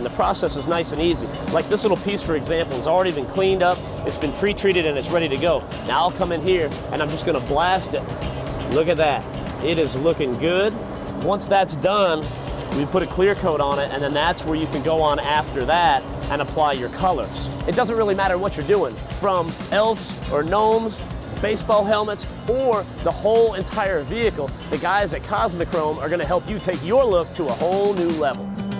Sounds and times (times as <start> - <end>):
Spray: 0.0 - 3.2, 6.8 - 11.4, 12.2 - 28.2
Speech: 0.0 - 8.0, 8.7 - 28.4
Music: 0.0 - 28.8.